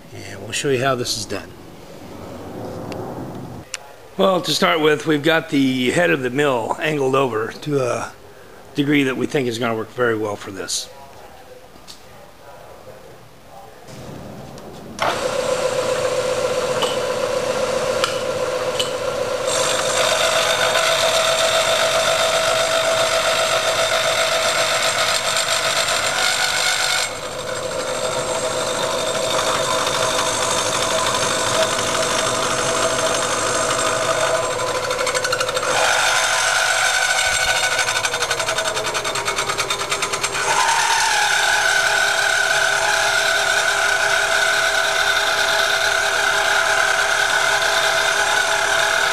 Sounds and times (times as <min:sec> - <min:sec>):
Speech: 0:00.0 - 0:01.5, 0:03.7 - 0:13.9.